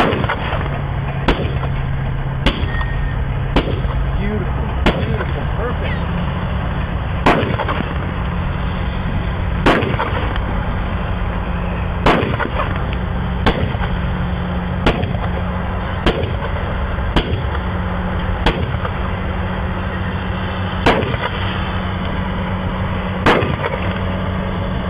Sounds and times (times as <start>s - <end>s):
Vehicle: 0.0s - 24.8s.